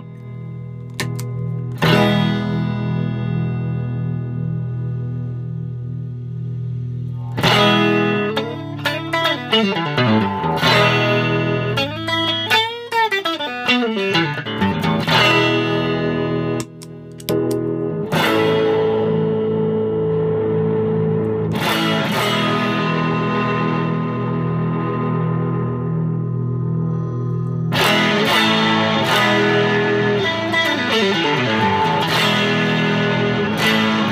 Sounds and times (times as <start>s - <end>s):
Effects unit: 0.0s - 34.1s
Electronic tuner: 0.0s - 34.1s
Music: 0.0s - 34.1s.